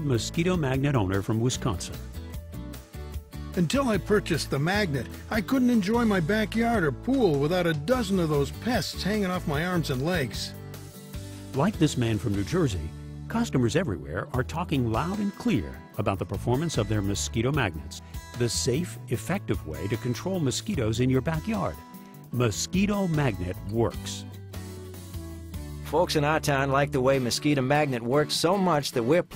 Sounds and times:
Speech: 0:00.0 - 0:02.1, 0:03.6 - 0:10.5, 0:11.6 - 0:24.3, 0:25.8 - 0:29.3
Music: 0:00.0 - 0:29.3.

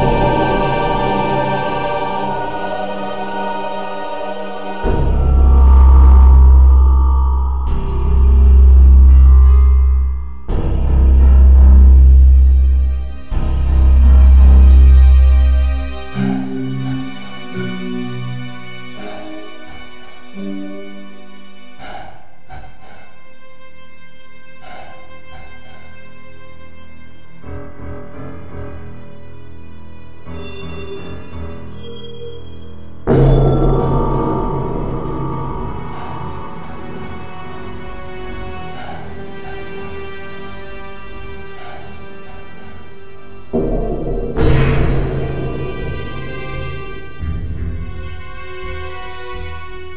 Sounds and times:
Scary music: 0:00.0 - 0:49.9
Soundtrack music: 0:00.0 - 0:49.9.

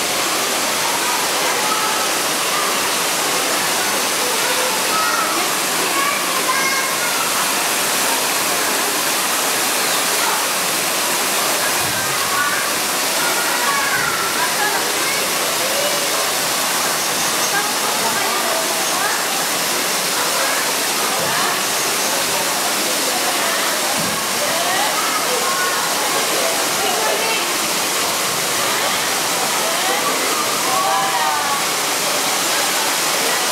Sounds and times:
Stream: 0:00.0 - 0:33.5
Waterfall: 0:00.0 - 0:33.5
Speech: 0:00.1 - 0:33.5.

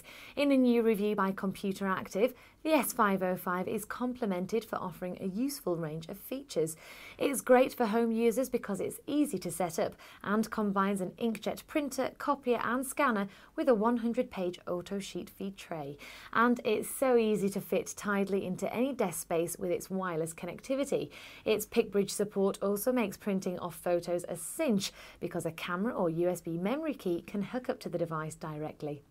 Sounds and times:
Speech: 0:00.0 - 0:29.1.

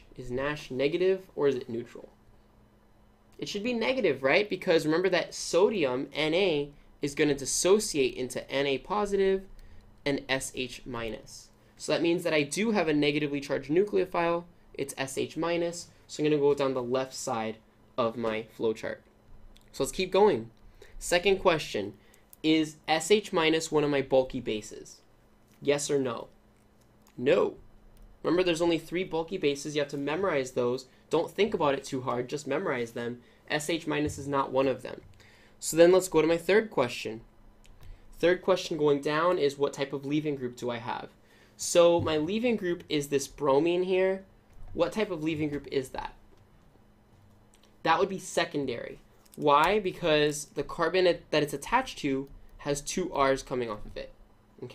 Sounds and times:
Speech: 0:00.0 - 0:02.2, 0:03.4 - 0:19.1, 0:19.7 - 0:25.0, 0:25.6 - 0:26.4, 0:27.1 - 0:37.3, 0:38.2 - 0:46.2, 0:47.8 - 0:54.7.

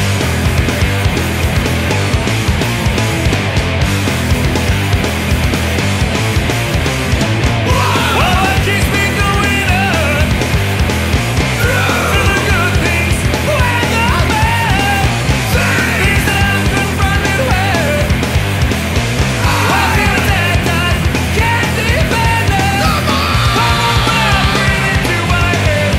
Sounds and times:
Music: 0:00.0 - 0:25.9.

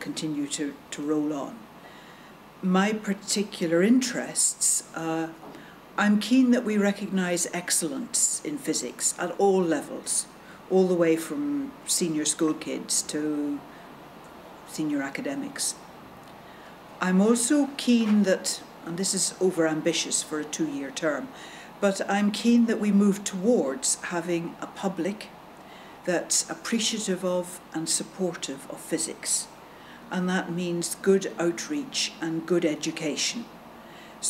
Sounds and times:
Speech: 0:00.0 - 0:01.6, 0:02.6 - 0:13.7, 0:14.7 - 0:15.8, 0:17.0 - 0:25.3, 0:26.0 - 0:33.5.

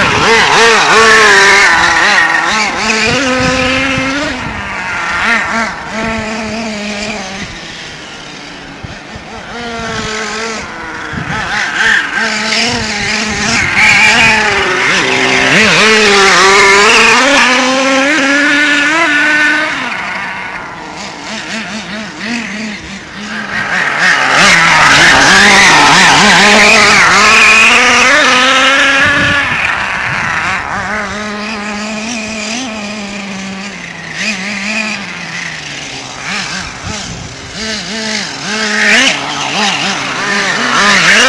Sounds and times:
Vehicle: 0:00.0 - 0:41.2.

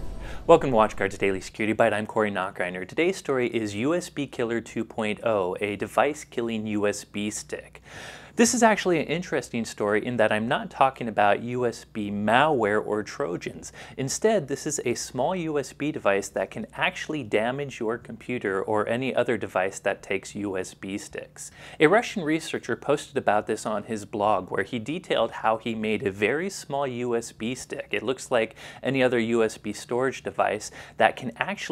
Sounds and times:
Speech: 0:00.4 - 0:07.8, 0:08.4 - 0:31.7.

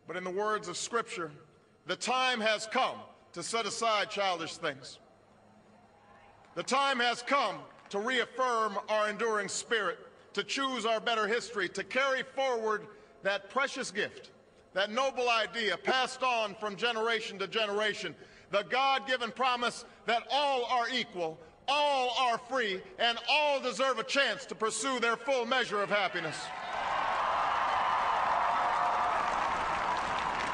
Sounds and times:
Narration, monologue: 0:00.0 - 0:26.5
Male speech, man speaking: 0:00.1 - 0:05.0, 0:06.6 - 0:26.5.

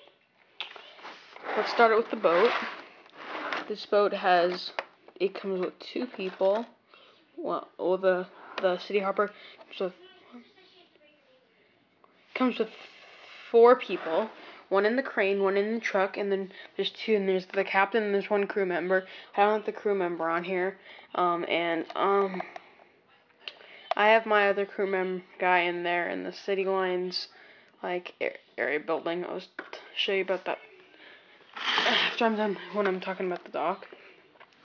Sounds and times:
Speech: 0:00.0 - 0:02.7, 0:13.5 - 0:22.5, 0:31.8 - 0:34.0.

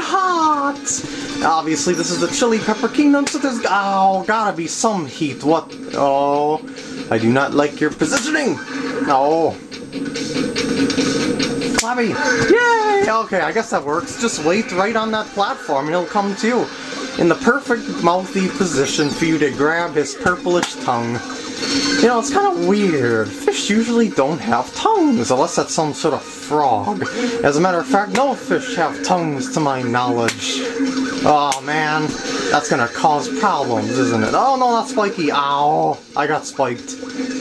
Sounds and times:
Speech: 0:00.0 - 0:09.6, 0:11.8 - 0:21.2, 0:22.0 - 0:30.6, 0:31.2 - 0:37.0.

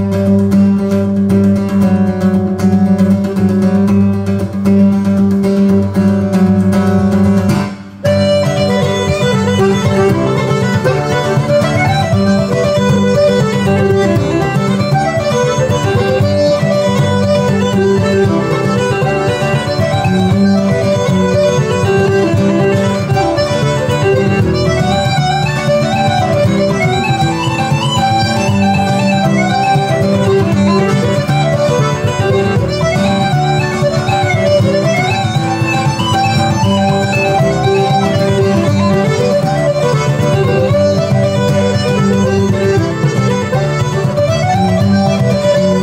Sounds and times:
Traditional music: 0:00.0 - 0:45.8.

